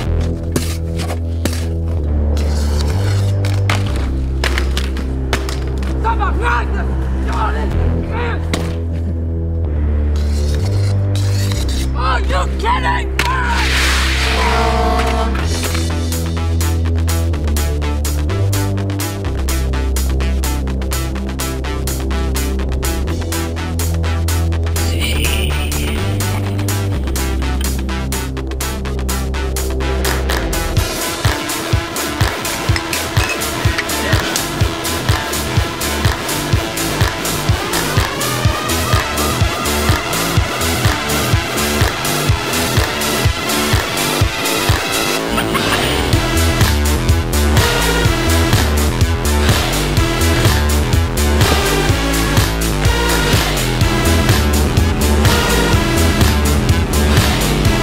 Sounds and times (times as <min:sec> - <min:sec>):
Music: 0:00.0 - 0:57.8
Speech: 0:06.0 - 0:08.5, 0:12.0 - 0:13.7.